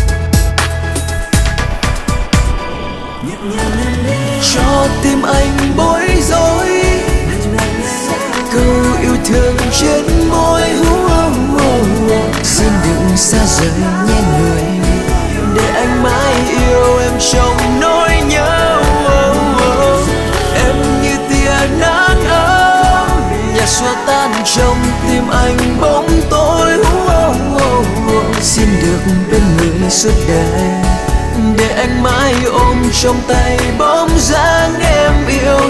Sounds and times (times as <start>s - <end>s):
Music of Asia: 0.0s - 35.7s
Pop music: 0.0s - 35.7s.